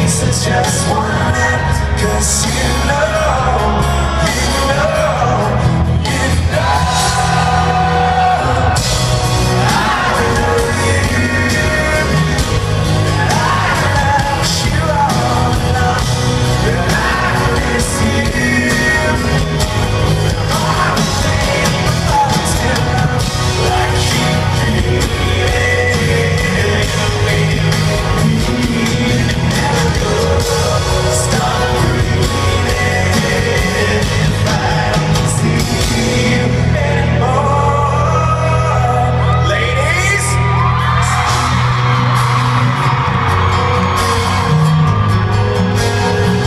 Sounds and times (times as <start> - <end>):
Music: 0.0 - 46.4.